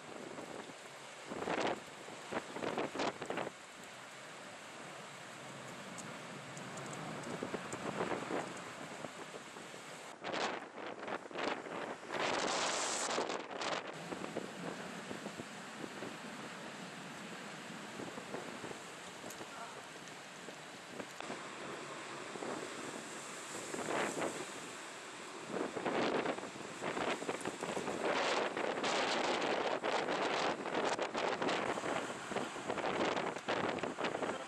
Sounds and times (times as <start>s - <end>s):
Vehicle: 0.0s - 34.4s.